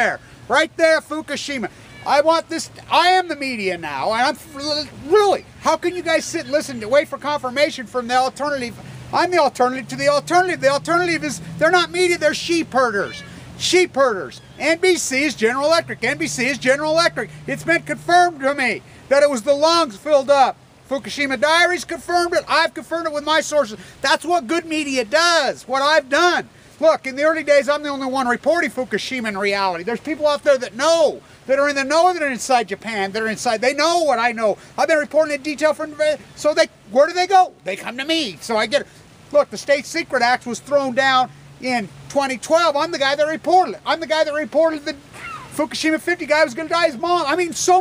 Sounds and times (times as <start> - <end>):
Speech: 0.0 - 47.8.